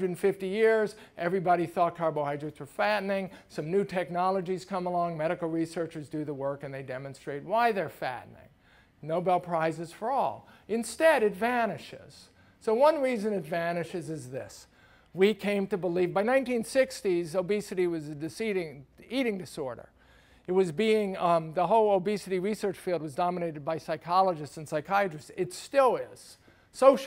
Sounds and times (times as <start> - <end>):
Speech: 0.0 - 19.9, 20.5 - 27.0.